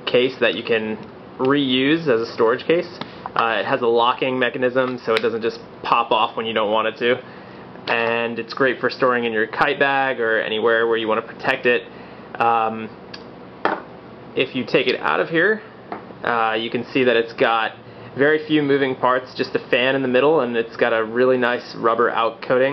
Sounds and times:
Speech: 0.1 - 7.3, 7.9 - 13.0, 14.4 - 22.7.

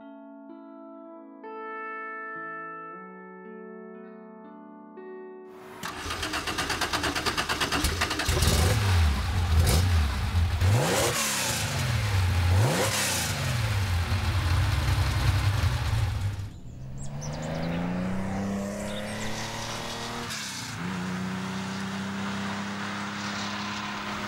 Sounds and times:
Race car, auto racing: 5.7 - 24.2
Outside, rural or natural: 5.8 - 24.2.

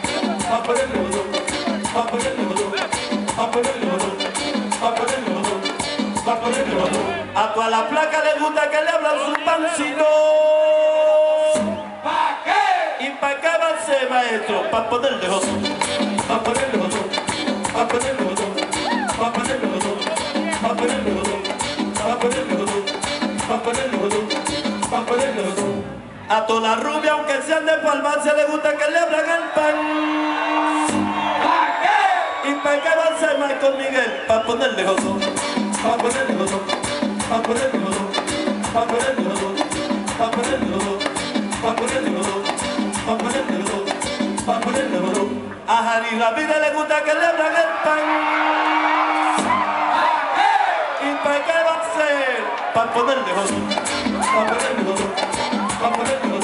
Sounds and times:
Music: 0.0 - 7.9, 9.7 - 12.0, 14.7 - 26.1, 30.6 - 31.4, 34.4 - 45.7, 49.0 - 49.7, 52.9 - 56.4.

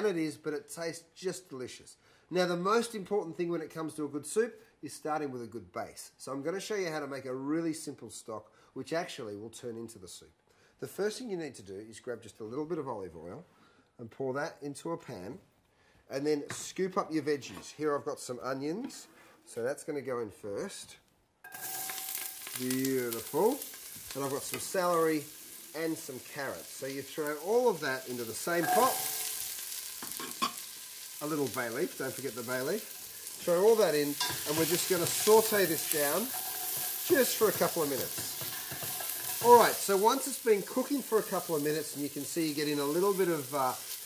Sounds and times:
Speech: 0.0 - 15.4, 16.1 - 21.1, 22.6 - 29.0, 31.2 - 36.3, 37.1 - 38.3, 39.4 - 43.8.

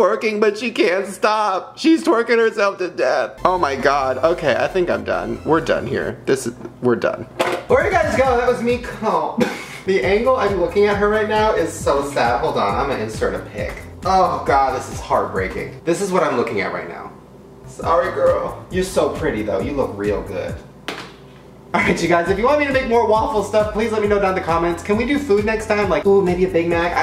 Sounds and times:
Speech: 0.0 - 20.7, 21.8 - 27.0
Music: 3.3 - 20.9, 21.6 - 27.0.

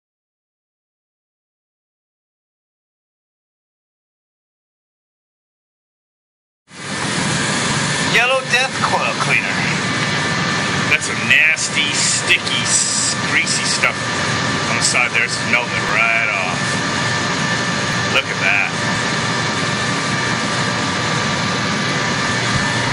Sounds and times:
Speech: 8.1 - 9.8, 10.9 - 14.0, 14.7 - 16.7, 18.1 - 18.8.

